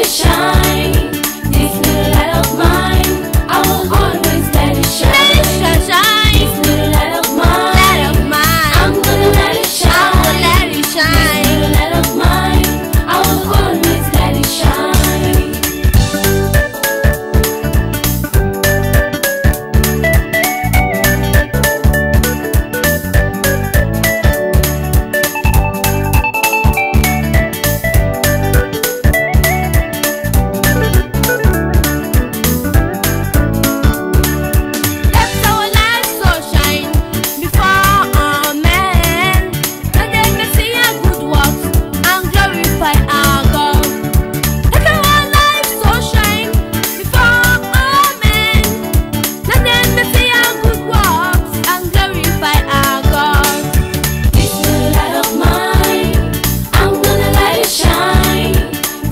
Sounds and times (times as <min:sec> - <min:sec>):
Music: 0:00.0 - 0:59.1.